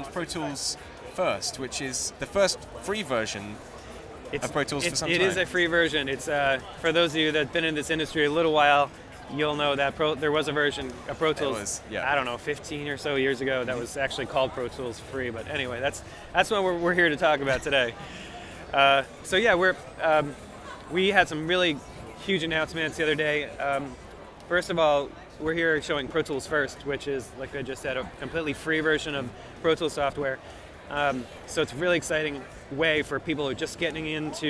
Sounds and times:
Speech: 0.0 - 3.6, 4.2 - 34.4.

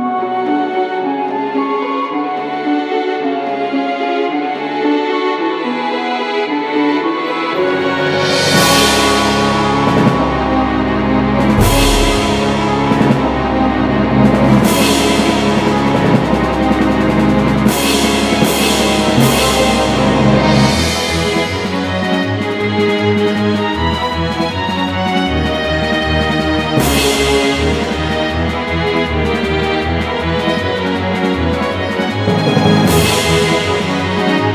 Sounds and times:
Music: 0.0 - 34.5.

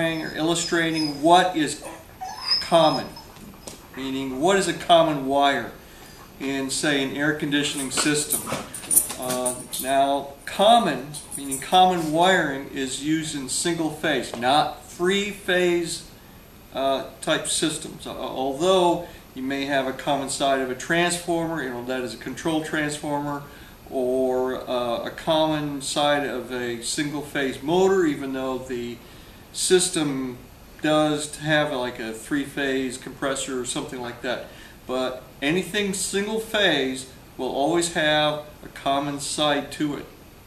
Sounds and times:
Speech: 0.0 - 3.2, 4.0 - 5.8, 6.4 - 8.6, 9.2 - 16.1, 16.8 - 29.0, 29.6 - 40.2
Inside, small room: 0.0 - 40.4.

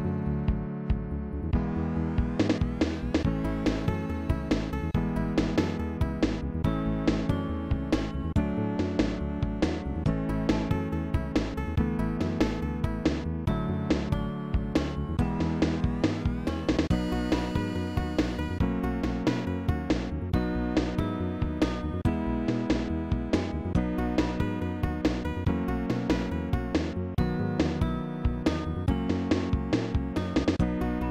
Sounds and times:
Video game music: 0.0 - 31.1.

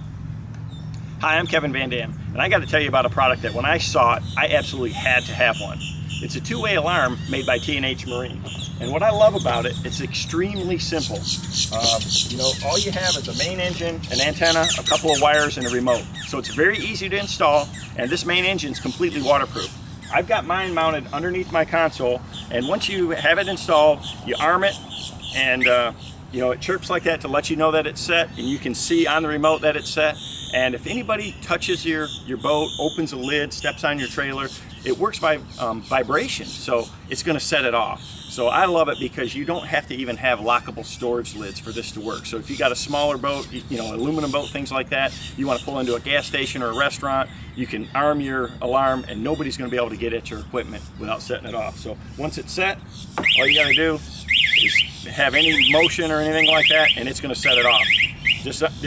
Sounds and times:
Speech: 1.2 - 52.8, 53.4 - 54.0, 55.1 - 58.8.

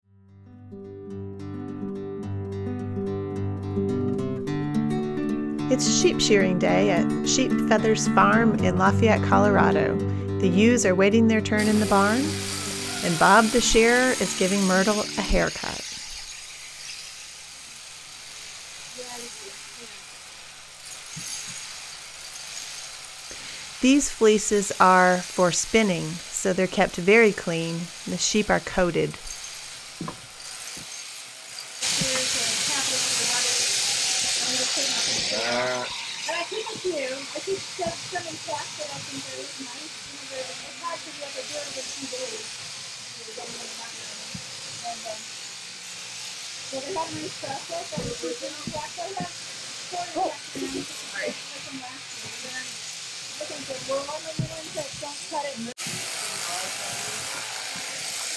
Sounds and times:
Speech: 5.7 - 12.3, 13.0 - 15.8, 23.8 - 29.2, 34.4 - 42.4, 46.7 - 49.3, 53.4 - 55.7.

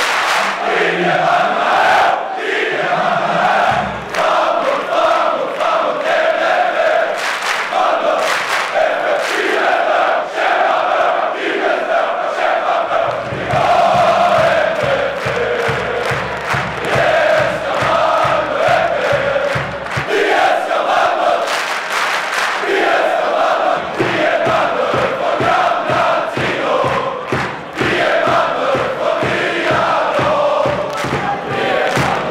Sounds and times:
Music: 0.0 - 32.3.

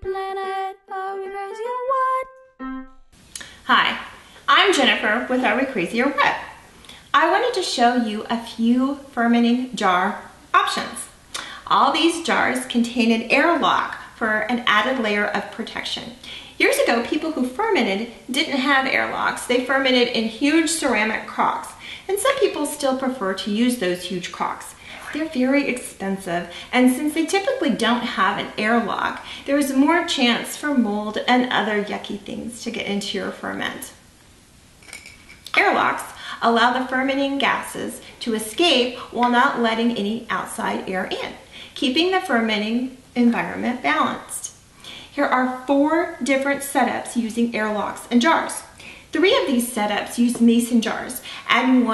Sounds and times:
Speech: 3.7 - 6.5, 7.1 - 34.0, 35.5 - 44.6, 45.2 - 51.9.

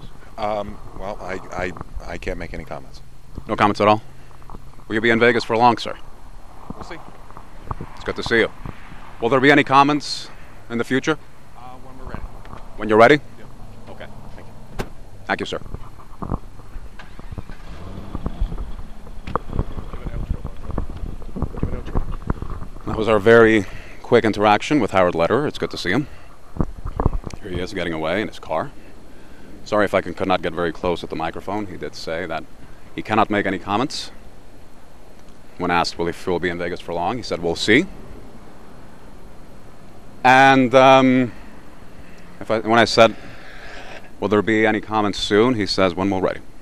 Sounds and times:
Speech: 0.4 - 4.0, 4.9 - 6.0, 8.0 - 8.5, 9.2 - 12.2, 12.8 - 14.5, 15.3 - 15.6, 19.9 - 20.6, 22.9 - 26.1, 27.4 - 28.7, 29.7 - 32.4, 33.0 - 34.2, 35.6 - 37.9, 40.2 - 41.3, 42.4 - 43.2, 44.2 - 46.4
Car: 12.4 - 22.8.

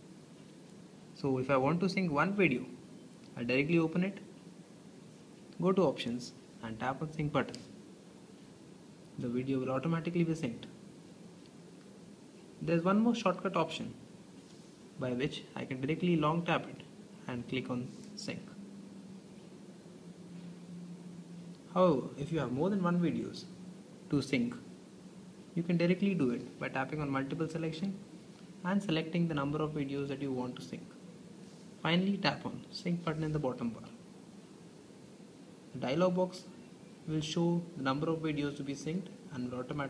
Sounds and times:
Speech: 1.2 - 2.8, 3.4 - 4.3, 5.6 - 7.7, 9.2 - 10.8, 12.6 - 14.0, 15.0 - 18.6, 21.7 - 24.7, 25.6 - 31.0, 31.8 - 34.0, 35.7 - 39.9.

